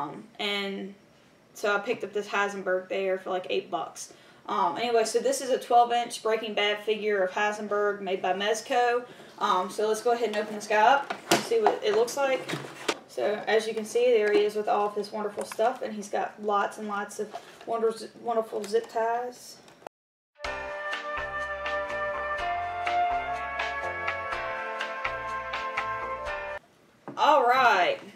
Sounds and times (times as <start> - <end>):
Speech: 0.0 - 1.0, 1.6 - 19.7, 27.2 - 28.1.